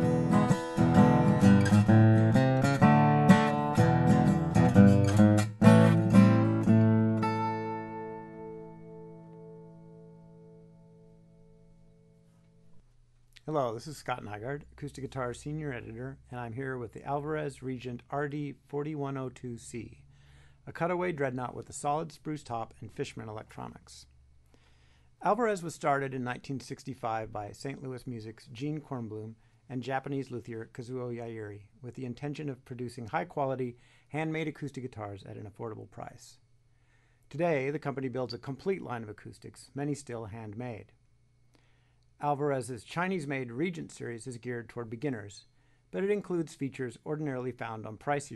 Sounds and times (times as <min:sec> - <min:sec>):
Speech: 0:13.4 - 0:20.0, 0:20.7 - 0:24.1, 0:25.2 - 0:36.4, 0:37.3 - 0:41.0, 0:42.2 - 0:48.3.